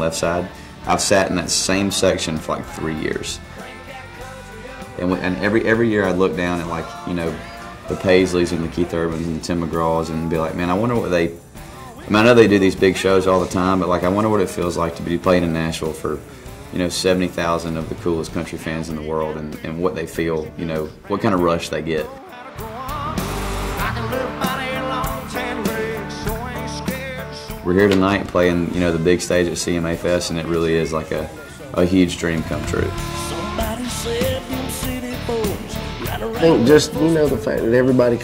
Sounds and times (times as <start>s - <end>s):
Speech: 0.0s - 3.4s, 4.9s - 11.4s, 12.0s - 22.2s, 27.6s - 33.4s, 36.1s - 38.2s
Exciting music: 0.0s - 10.4s, 22.4s - 28.0s, 31.2s - 37.7s.